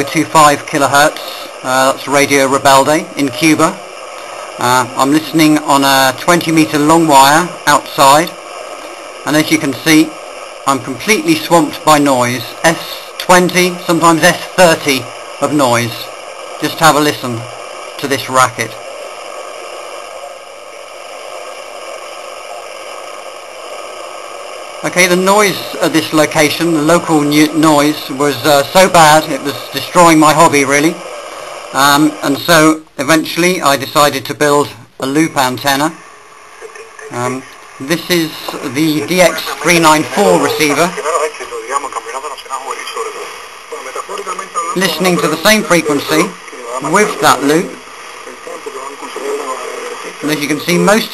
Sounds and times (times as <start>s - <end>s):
Speech: 0.0s - 3.8s, 4.6s - 8.4s, 9.3s - 18.8s, 24.9s - 31.0s, 31.8s - 36.0s, 36.6s - 51.1s
Noise: 0.0s - 51.1s
Radio: 0.0s - 51.1s.